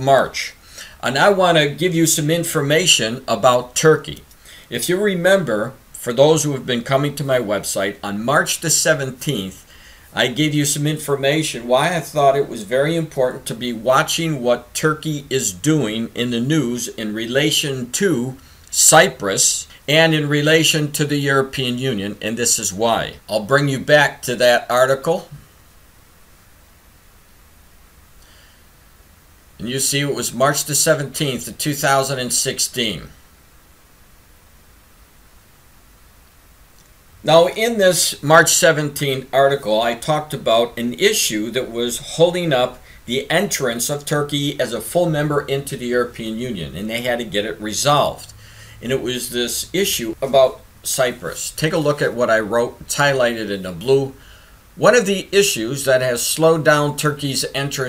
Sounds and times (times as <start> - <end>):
Speech: 0.0 - 25.4, 29.6 - 33.2, 37.2 - 54.2, 54.8 - 57.8.